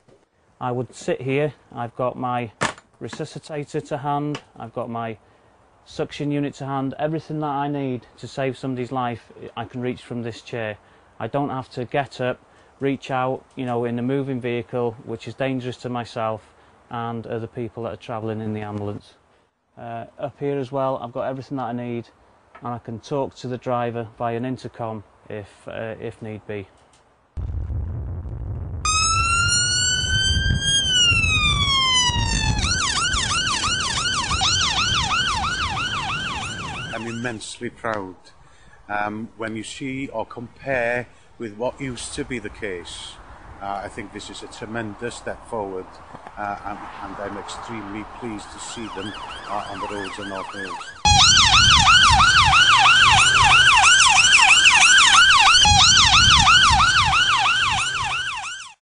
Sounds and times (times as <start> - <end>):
Ambulance (siren): 28.9 - 37.3, 48.7 - 58.8.